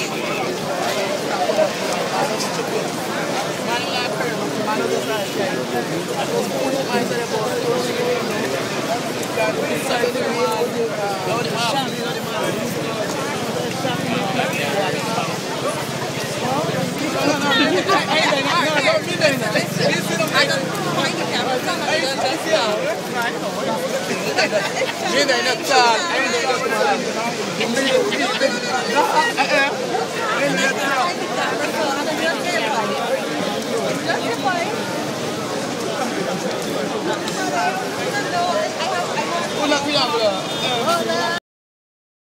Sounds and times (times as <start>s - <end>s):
Speech: 0.0s - 41.4s.